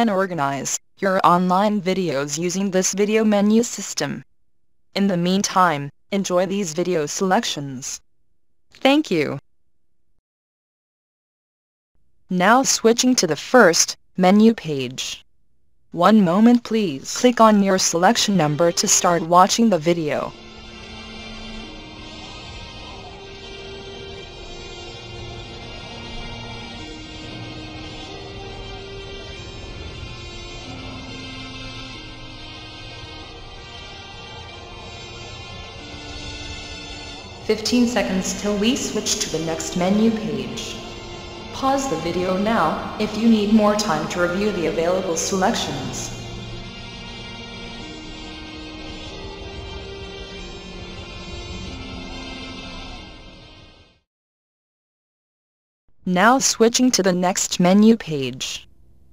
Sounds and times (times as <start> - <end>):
Speech: 0.0 - 4.2, 5.0 - 8.0, 8.9 - 9.4, 12.3 - 15.2, 16.0 - 20.3, 37.5 - 40.8, 41.6 - 46.2, 56.1 - 58.7
Music: 16.4 - 54.1.